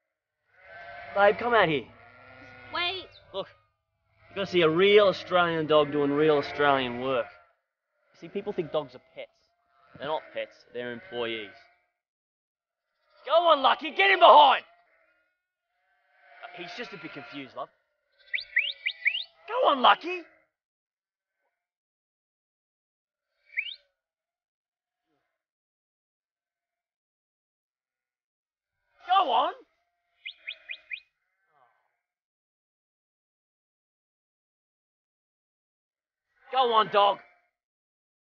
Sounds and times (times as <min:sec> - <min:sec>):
Speech: 0:01.2 - 0:01.9, 0:04.4 - 0:07.3, 0:08.2 - 0:09.3, 0:10.0 - 0:11.5, 0:13.3 - 0:14.6, 0:16.5 - 0:17.7, 0:19.5 - 0:20.3, 0:29.1 - 0:29.6, 0:36.6 - 0:37.2.